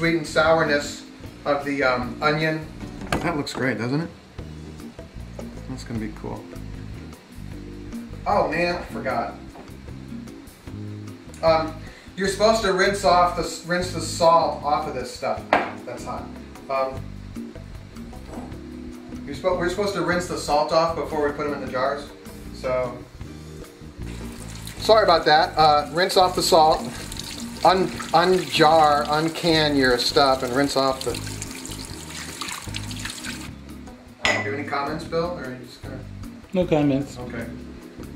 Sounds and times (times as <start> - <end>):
Music: 0.0 - 38.1
Sink (filling or washing): 24.0 - 33.5
Water: 24.1 - 33.5.